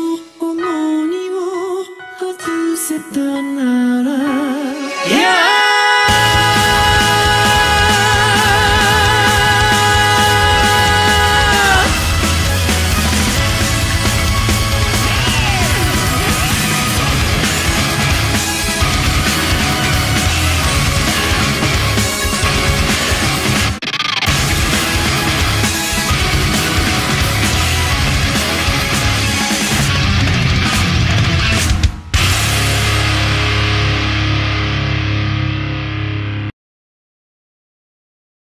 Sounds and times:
Music: 0.0 - 36.5.

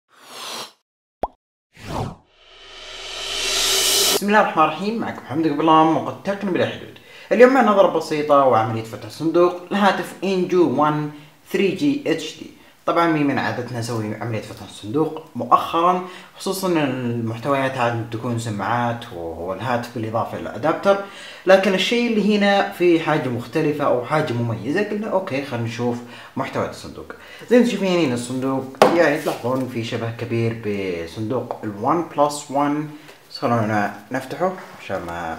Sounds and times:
Speech: 4.2 - 35.3.

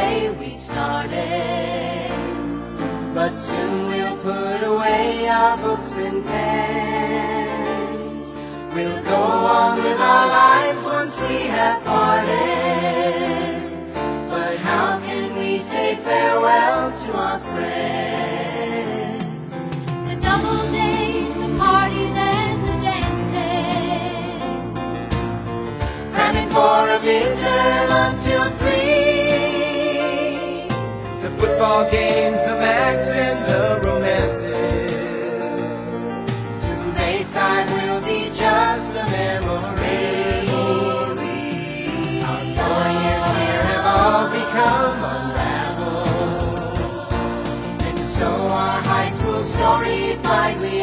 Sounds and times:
Music: 0.0 - 50.8.

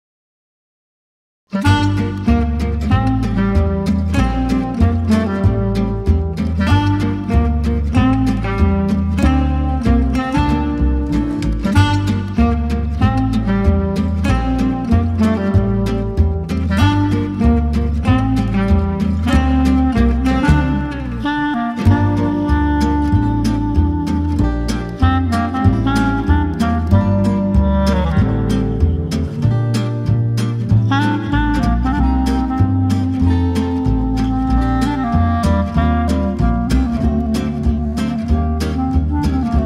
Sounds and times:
Guitar: 1.5 - 39.6.

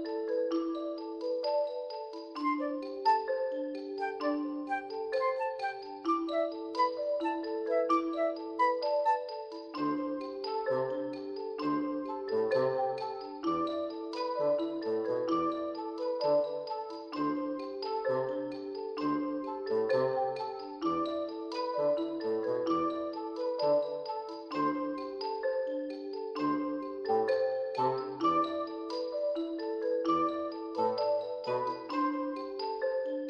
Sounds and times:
Music: 0.0 - 33.2.

